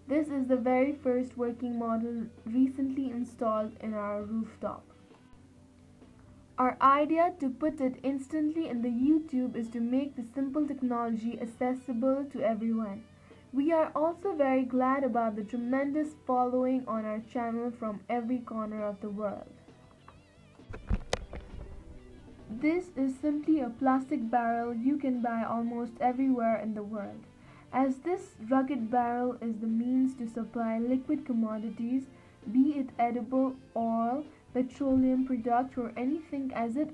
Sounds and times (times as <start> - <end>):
Speech: 0.1 - 4.9, 6.6 - 19.6, 22.5 - 36.9.